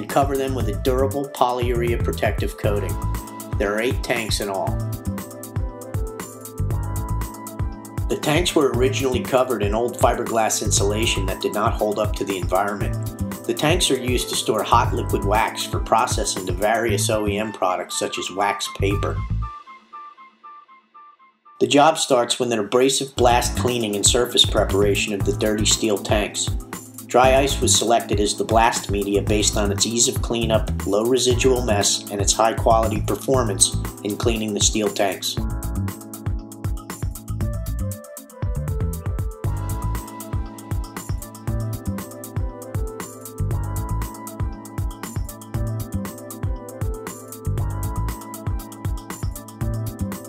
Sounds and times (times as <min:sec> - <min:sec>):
Speech: 0:00.0 - 0:03.0, 0:03.6 - 0:04.8, 0:08.1 - 0:19.2, 0:21.6 - 0:35.4
Music: 0:00.0 - 0:50.2.